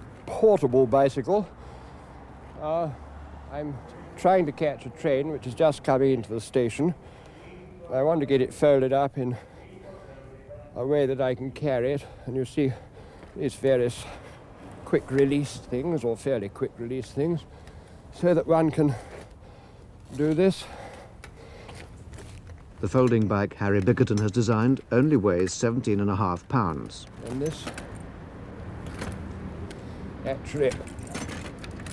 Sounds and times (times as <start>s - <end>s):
Speech: 2.6s - 12.8s, 13.4s - 14.1s, 14.9s - 17.4s, 22.8s - 27.8s, 30.2s - 30.9s.